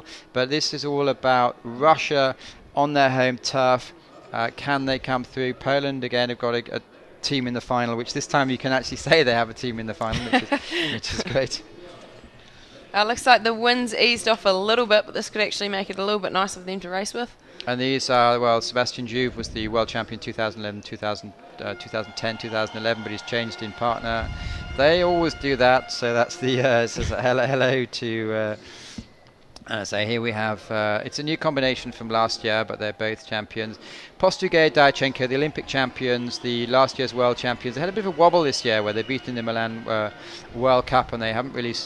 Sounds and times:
Speech: 0.0s - 12.1s, 13.0s - 28.6s, 29.6s - 41.8s.

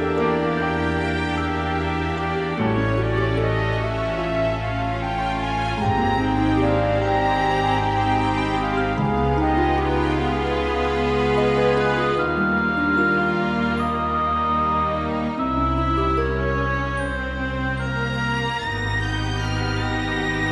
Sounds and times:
Music: 0.0s - 20.5s.

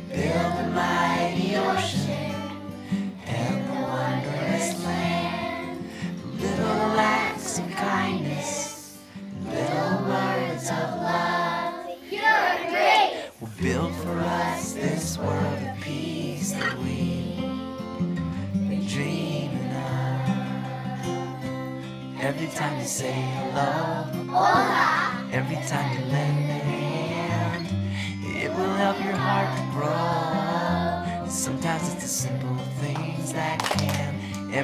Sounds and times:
Music: 0.0s - 11.9s, 13.4s - 34.6s.

